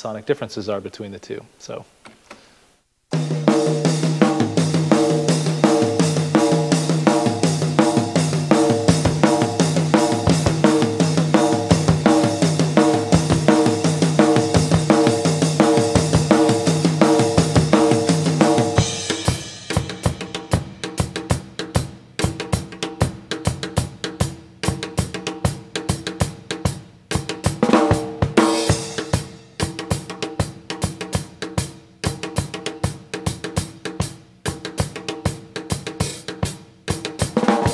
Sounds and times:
Drum kit: 3.1 - 37.7
Drum roll: 3.1 - 37.7.

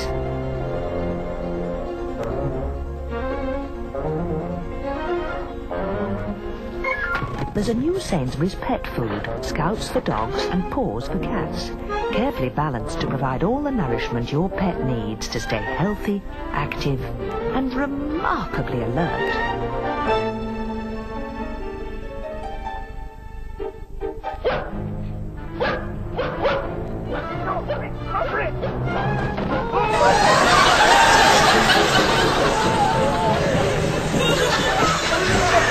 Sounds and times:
Music: 0.0 - 35.7
Bow-wow: 24.4 - 24.8, 25.6 - 26.8.

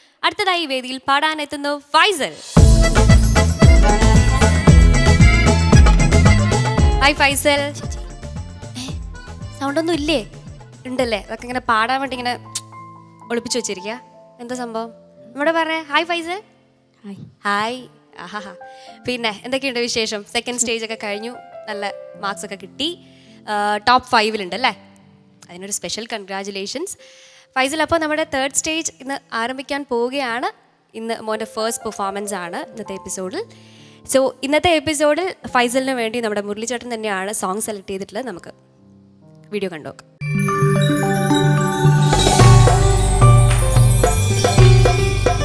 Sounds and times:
Speech: 0.2 - 2.4, 7.0 - 8.0, 9.6 - 10.3, 10.9 - 12.5, 13.3 - 16.4, 17.0 - 24.8, 25.4 - 27.0, 27.6 - 33.5, 34.1 - 38.6, 39.5 - 40.1
Music: 2.3 - 29.8, 31.1 - 45.4.

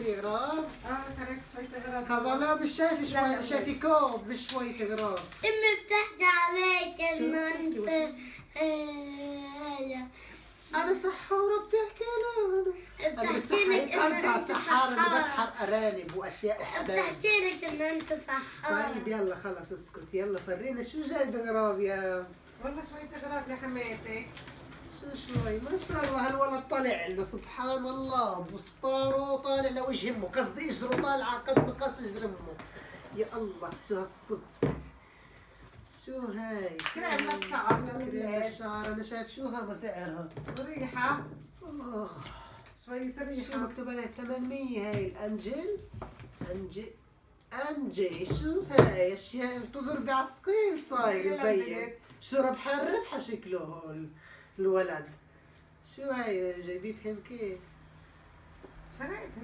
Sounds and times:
Inside, small room: 0.0 - 59.4.

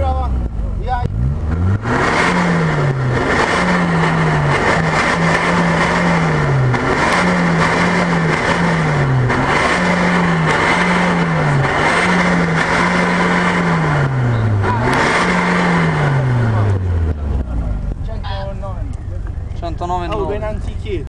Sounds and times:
Speech: 0.0 - 1.1, 17.4 - 21.0
Car: 0.0 - 21.0
Accelerating, revving, vroom: 1.0 - 17.5.

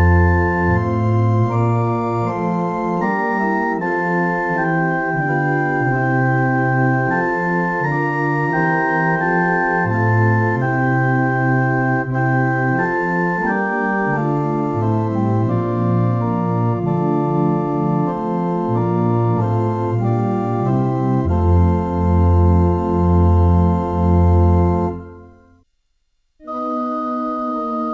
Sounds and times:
Piano: 0.0 - 25.6.

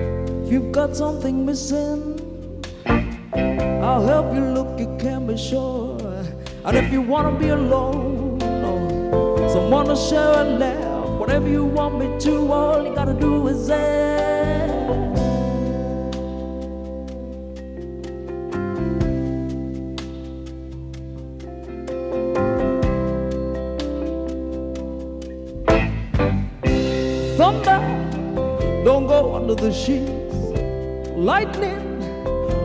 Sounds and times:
Music: 0.0 - 32.6.

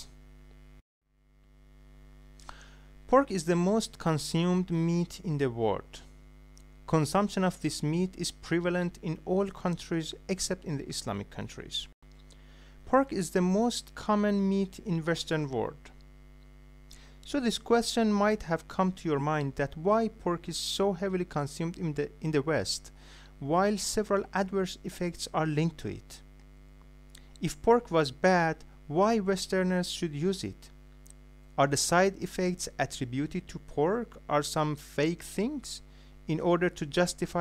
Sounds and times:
Speech: 3.1 - 6.1, 6.9 - 11.9, 12.9 - 16.0, 17.3 - 26.2, 27.4 - 30.7, 31.6 - 37.4.

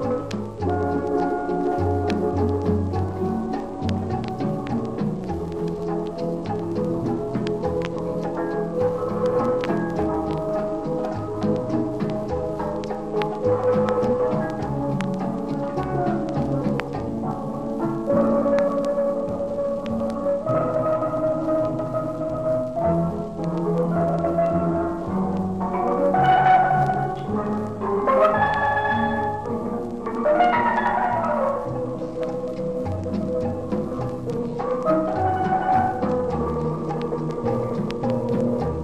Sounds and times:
Steelpan: 0.0 - 38.8.

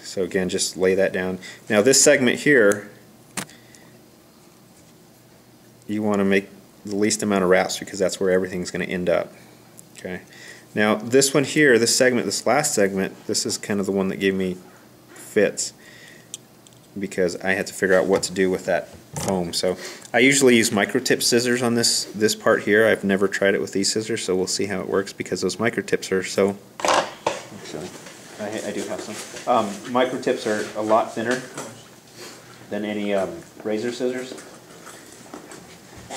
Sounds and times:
Speech: 0.0 - 3.0, 5.9 - 9.4, 10.0 - 14.6, 15.2 - 15.8, 17.0 - 26.6, 27.6 - 31.9, 32.7 - 34.5.

